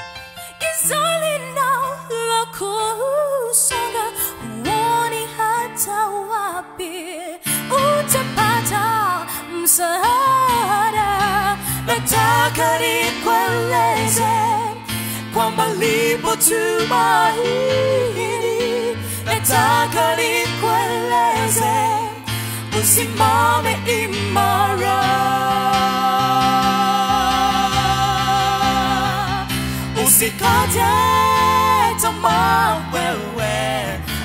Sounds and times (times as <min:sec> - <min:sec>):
Choir: 0:07.7 - 0:34.2.